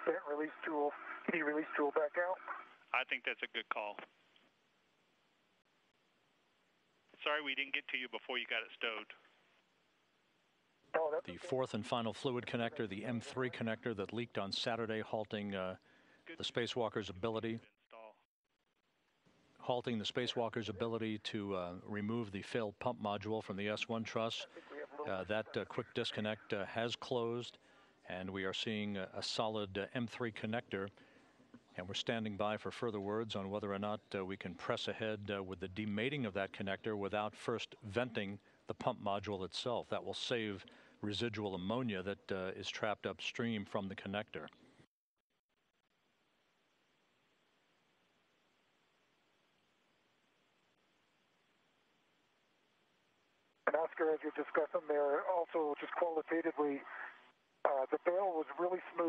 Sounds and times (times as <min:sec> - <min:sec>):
Speech: 0:00.0 - 0:04.1, 0:07.2 - 0:09.3, 0:11.0 - 0:18.2, 0:19.6 - 0:31.0, 0:31.8 - 0:44.6, 0:53.7 - 0:59.0.